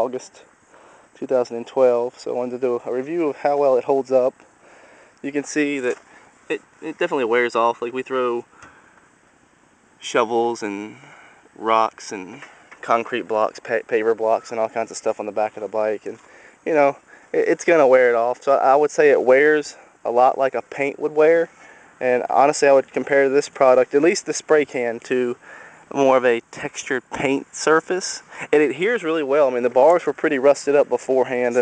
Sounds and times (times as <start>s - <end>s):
Speech: 0.0s - 0.5s, 1.2s - 4.4s, 5.2s - 8.5s, 10.0s - 31.6s.